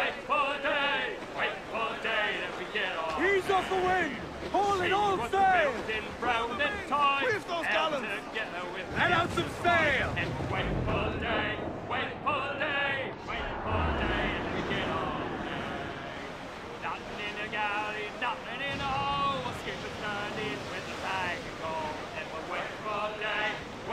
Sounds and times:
Speech: 0.0s - 11.6s.

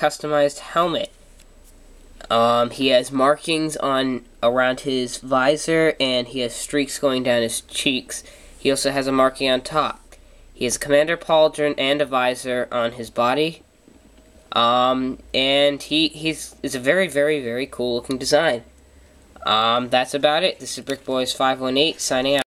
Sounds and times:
Speech: 0.0s - 1.2s, 2.2s - 13.7s, 14.5s - 18.7s, 19.4s - 22.5s.

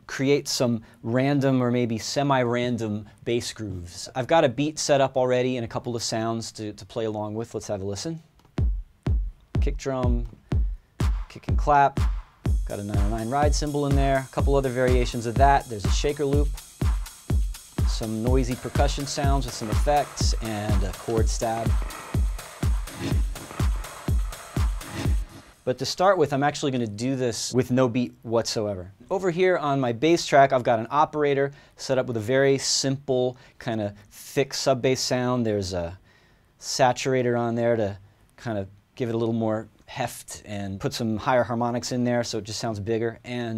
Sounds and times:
Speech: 0.0s - 8.3s, 9.6s - 10.4s, 11.3s - 12.0s, 12.7s - 16.6s, 17.9s - 21.8s, 25.7s - 36.0s, 36.6s - 43.5s
Music: 8.4s - 27.0s.

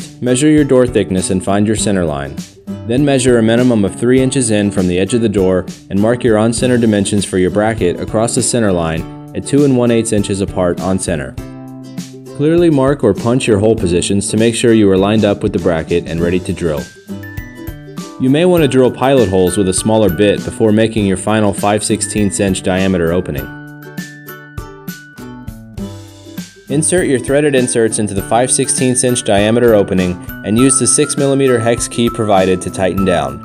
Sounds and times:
Speech: 0.0s - 11.4s, 12.4s - 16.9s, 18.2s - 23.5s, 26.7s - 33.4s
Music: 0.0s - 33.4s.

